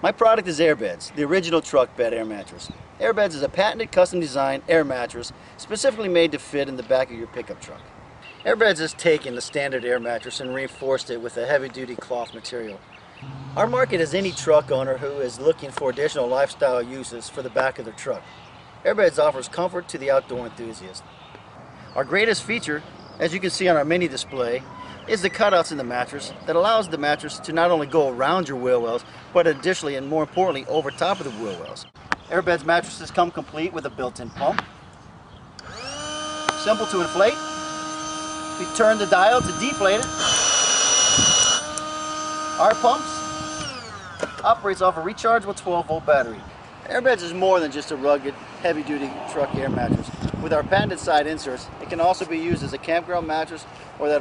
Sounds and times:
Speech: 0.0s - 7.8s, 8.4s - 12.8s, 13.6s - 18.2s, 18.8s - 21.0s, 22.0s - 34.7s, 36.6s - 37.4s, 38.6s - 40.1s, 42.6s - 43.2s, 44.4s - 54.2s.

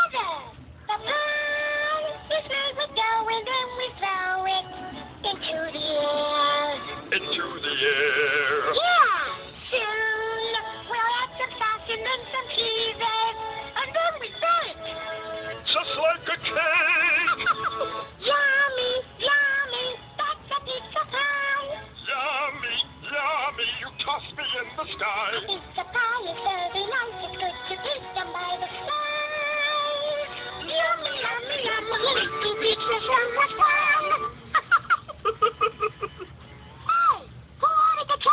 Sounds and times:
Music: 0.0s - 34.6s, 35.4s - 38.3s
Male singing: 7.1s - 8.8s, 15.6s - 17.4s, 22.0s - 25.6s.

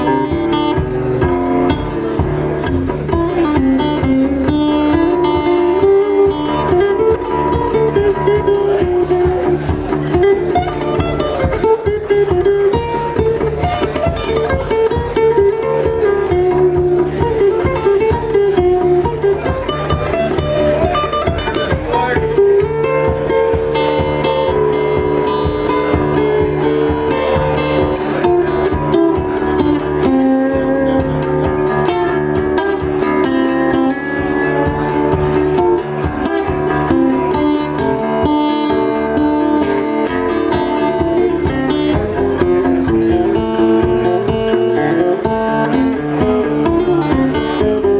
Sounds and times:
Music: 0.0s - 47.9s
Speech: 0.0s - 47.9s.

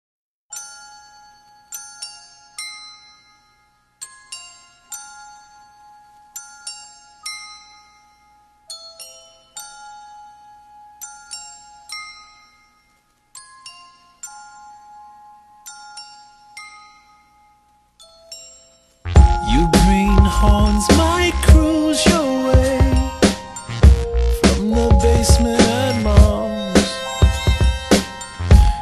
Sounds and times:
Music: 0.5s - 28.8s.

